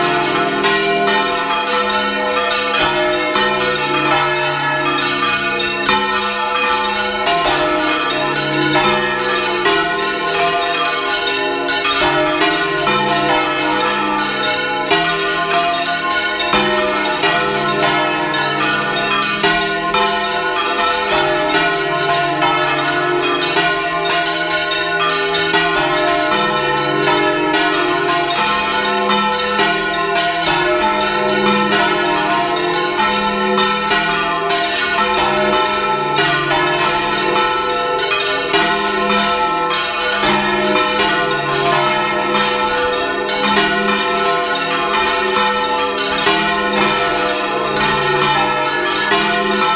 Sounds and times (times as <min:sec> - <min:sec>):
Church bell: 0:00.0 - 0:49.7.